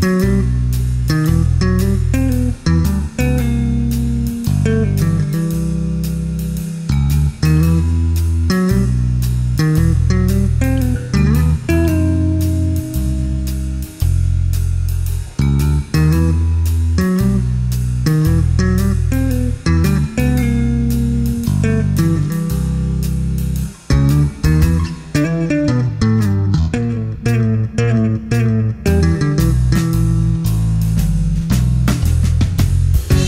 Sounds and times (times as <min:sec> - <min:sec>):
Bass guitar: 0:00.0 - 0:33.2.